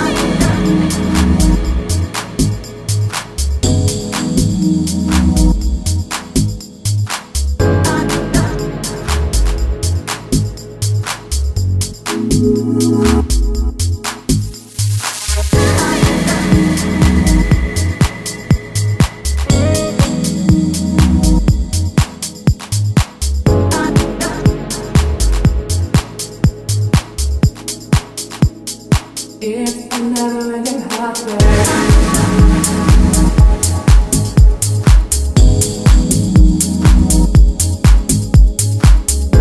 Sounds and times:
Electronica: 0.0 - 39.4.

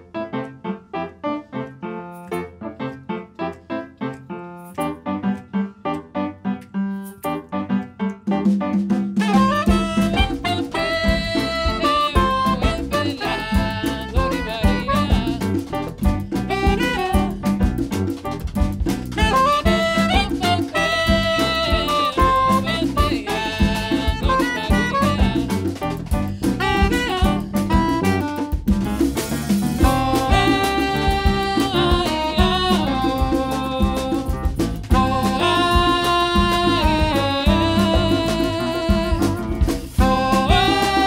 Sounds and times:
Music: 0.0 - 41.0.

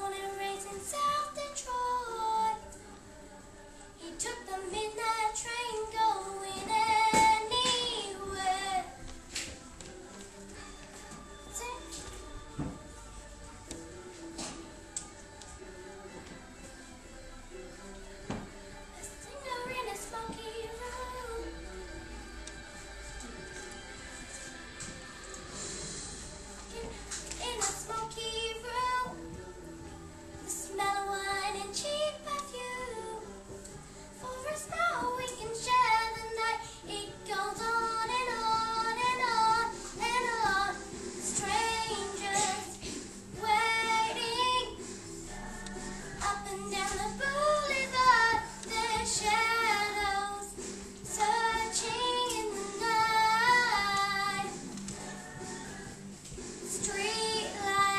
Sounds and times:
Child singing: 0.0 - 3.1, 4.0 - 9.0, 11.5 - 13.0, 19.0 - 21.6, 26.7 - 29.4, 30.4 - 33.4, 34.2 - 44.8, 46.1 - 55.7, 56.7 - 57.9
Music: 0.0 - 57.9.

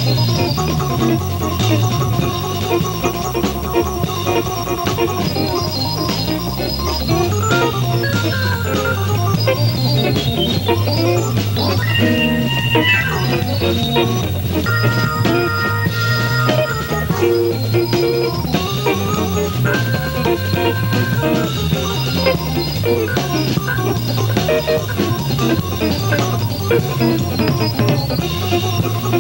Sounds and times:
Electric piano: 0.0 - 29.2
Hammond organ: 0.0 - 29.2.

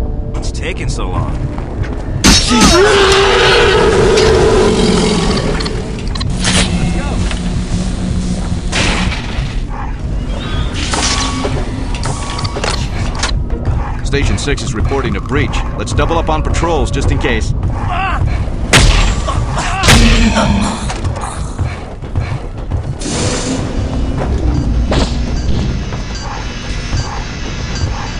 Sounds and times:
Speech: 14.0 - 17.5.

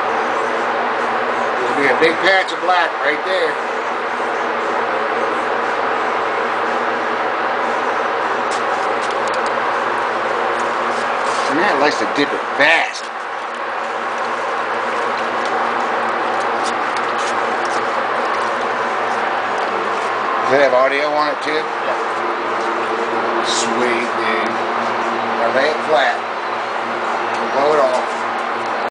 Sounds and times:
Speech: 1.6 - 3.6, 11.4 - 13.1, 20.4 - 22.0, 23.4 - 24.6, 25.4 - 26.2, 27.4 - 28.1.

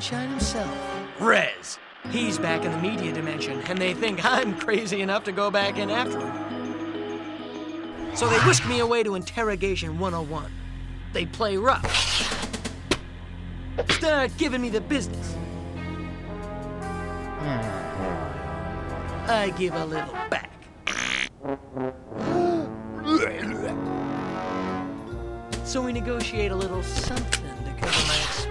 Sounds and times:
Speech: 0.0 - 6.2, 8.2 - 10.5, 11.2 - 11.9, 13.9 - 15.4, 19.3 - 20.6, 22.3 - 23.7, 25.7 - 28.5
Music: 0.0 - 20.6, 21.4 - 28.5.

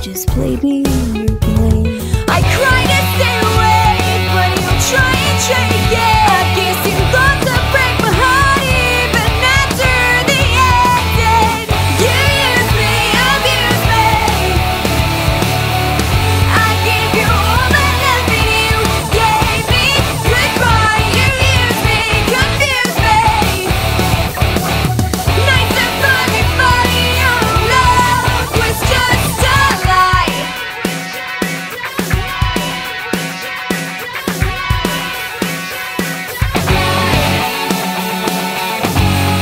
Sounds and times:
Exciting music: 0.0 - 39.4.

